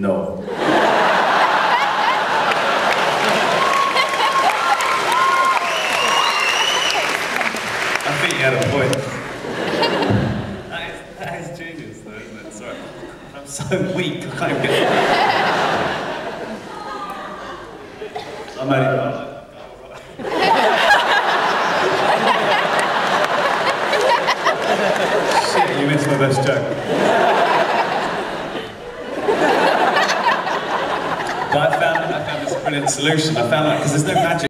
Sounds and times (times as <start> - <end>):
Speech: 8.1 - 9.0, 25.4 - 26.7, 31.6 - 34.5.